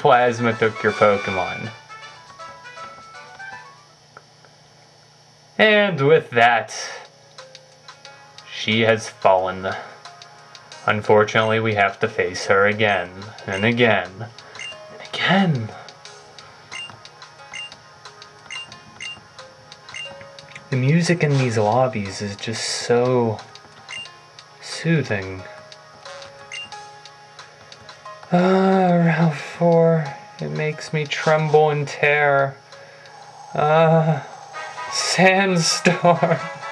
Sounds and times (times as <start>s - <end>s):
Speech: 0.0s - 1.8s, 5.6s - 7.0s, 8.5s - 9.9s, 10.9s - 14.3s, 15.0s - 15.8s, 20.7s - 23.4s, 24.6s - 25.5s, 28.3s - 32.6s, 33.6s - 34.3s, 35.0s - 36.2s.